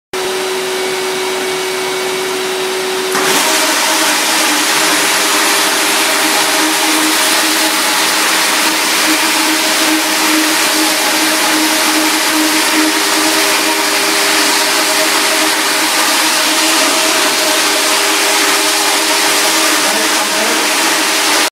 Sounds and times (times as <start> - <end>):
Vacuum cleaner: 0.2 - 21.5.